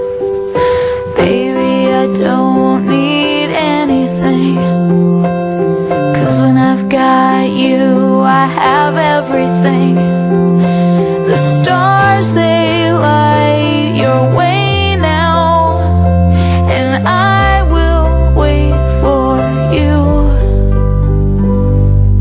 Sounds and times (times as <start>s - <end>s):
Music: 0.0s - 22.2s.